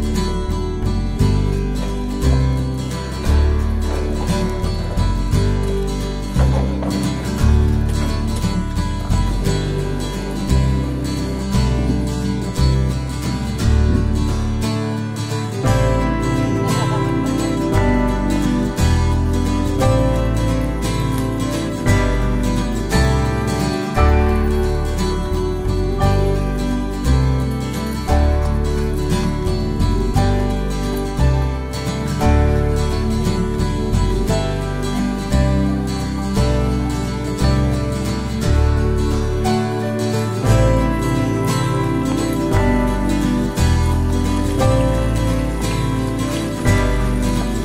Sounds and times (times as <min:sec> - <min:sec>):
Music: 0:00.0 - 0:47.6.